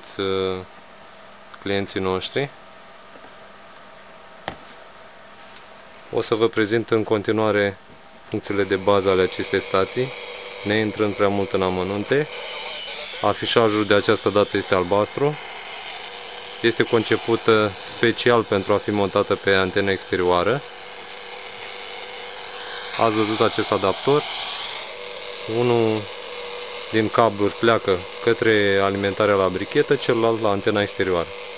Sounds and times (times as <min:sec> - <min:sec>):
Speech: 0:00.0 - 0:00.7, 0:01.6 - 0:02.6, 0:06.1 - 0:12.4, 0:13.1 - 0:15.4, 0:16.6 - 0:21.2, 0:22.9 - 0:24.3, 0:25.5 - 0:26.1, 0:26.9 - 0:31.3
Radio: 0:08.4 - 0:15.4, 0:16.6 - 0:21.8, 0:22.5 - 0:24.8, 0:25.4 - 0:26.2, 0:26.9 - 0:31.4.